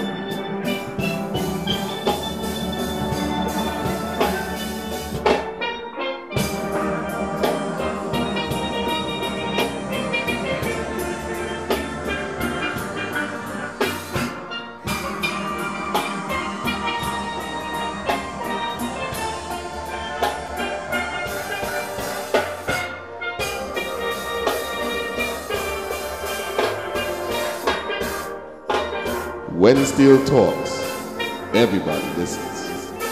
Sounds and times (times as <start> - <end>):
Drum: 0.0 - 5.7, 6.4 - 33.1
Drum kit: 0.0 - 33.1
Steelpan: 0.0 - 33.1.